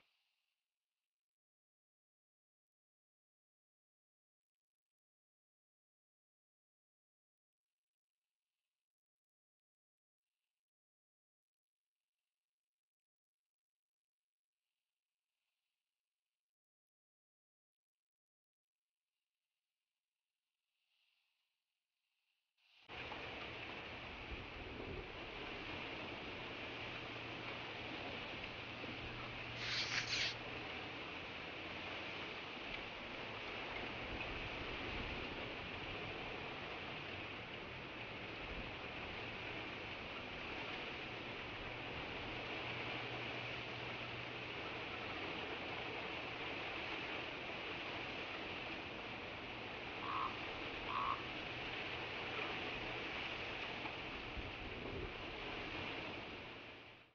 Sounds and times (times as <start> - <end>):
Mouse: 29.6 - 30.4.